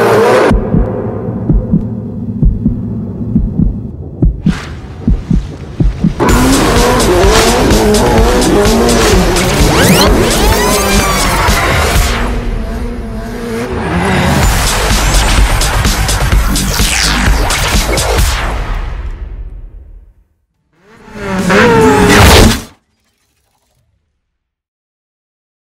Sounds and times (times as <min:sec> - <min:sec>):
Music: 0:05.9 - 0:13.0, 0:14.4 - 0:20.4.